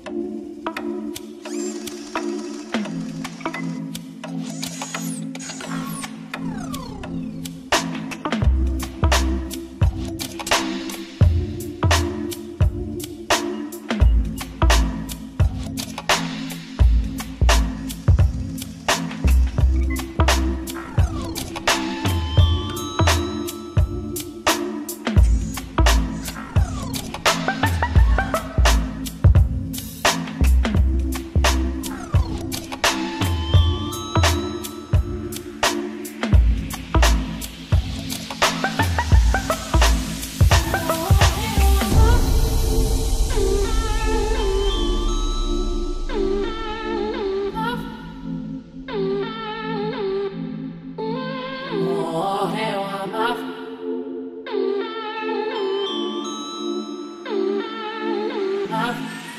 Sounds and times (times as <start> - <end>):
Music: 0.0 - 59.3
Sound effect: 1.4 - 8.2, 31.4 - 34.8, 37.0 - 50.1.